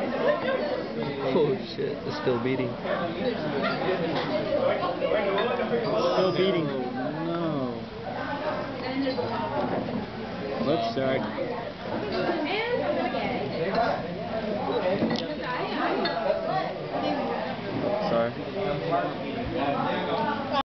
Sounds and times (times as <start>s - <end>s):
Inside, public space: 0.0s - 20.6s.